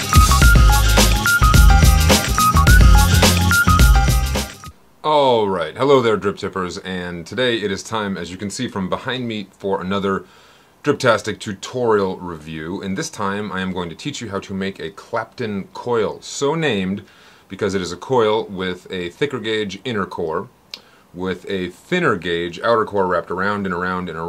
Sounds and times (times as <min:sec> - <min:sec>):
Speech: 0:05.0 - 0:20.5, 0:21.2 - 0:24.2.